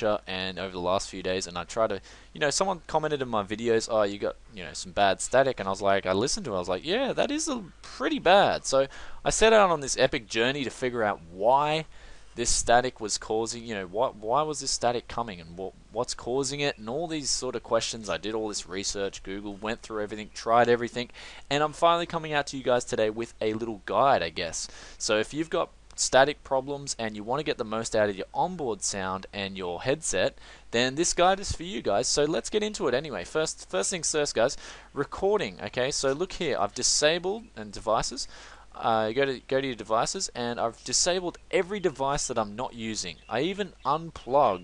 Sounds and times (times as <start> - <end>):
Speech: 0.0 - 44.6.